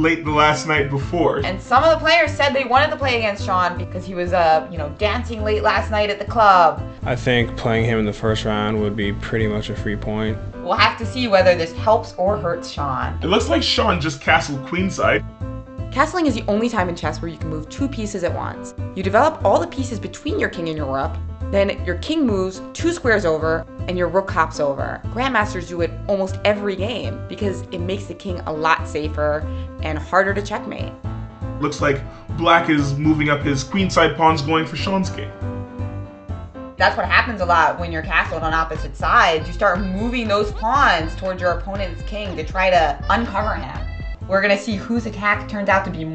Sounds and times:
Conversation: 0.0 - 46.1.

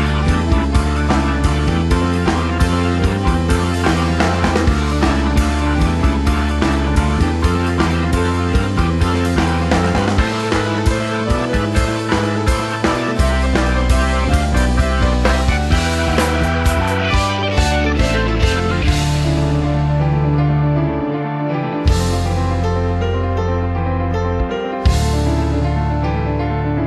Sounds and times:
Music: 0.0 - 26.8.

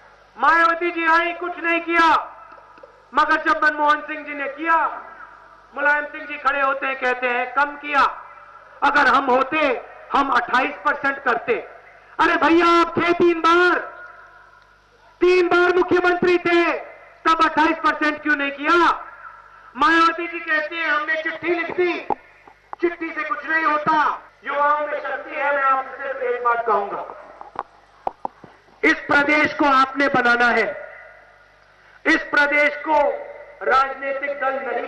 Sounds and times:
Narration, monologue: 0.0 - 34.8
Male speech, man speaking: 0.4 - 2.3, 3.2 - 5.1, 5.8 - 8.2, 8.8 - 14.0, 15.2 - 19.1, 19.8 - 22.2, 22.8 - 27.2, 28.8 - 31.0, 32.1 - 34.8.

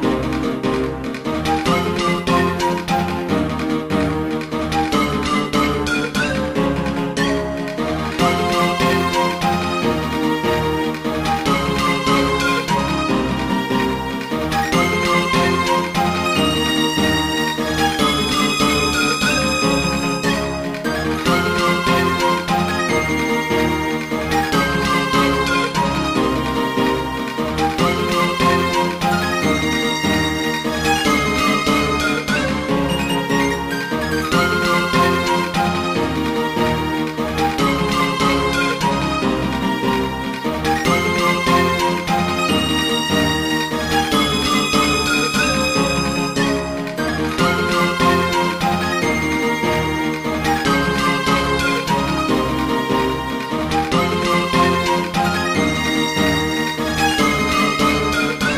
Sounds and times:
Music: 0.0 - 58.5.

